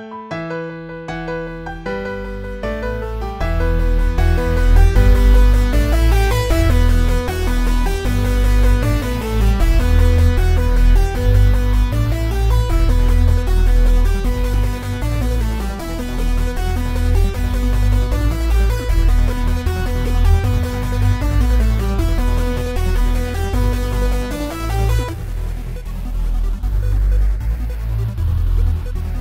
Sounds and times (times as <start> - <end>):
Techno: 1.7 - 29.2.